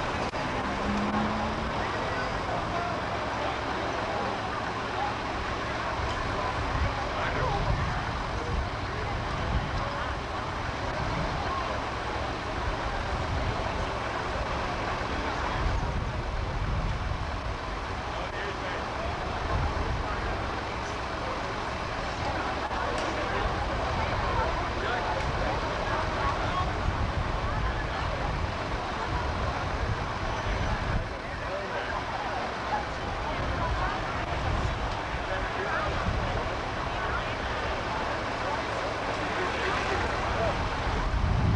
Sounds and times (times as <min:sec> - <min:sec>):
Speech: 0:00.0 - 0:41.5.